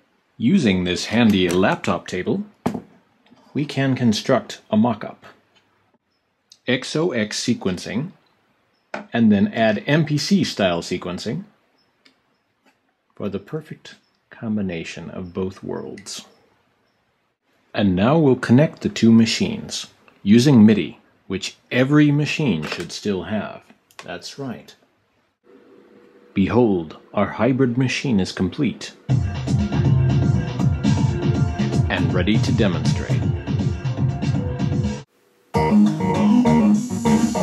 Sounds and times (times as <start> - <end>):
Speech: 0.4 - 2.5, 3.4 - 5.4, 6.5 - 8.2, 9.0 - 11.5, 13.2 - 16.3, 17.8 - 24.8, 26.4 - 29.0, 31.9 - 33.3
Drum machine: 29.1 - 35.0.